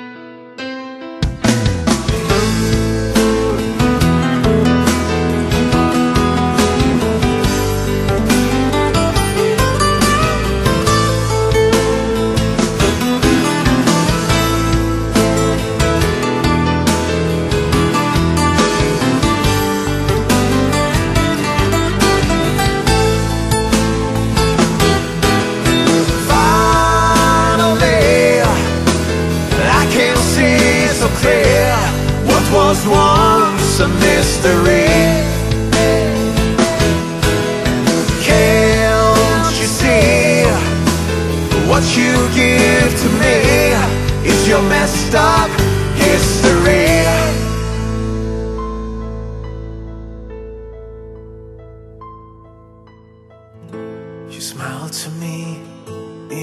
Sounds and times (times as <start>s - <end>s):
Background music: 0.0s - 56.4s.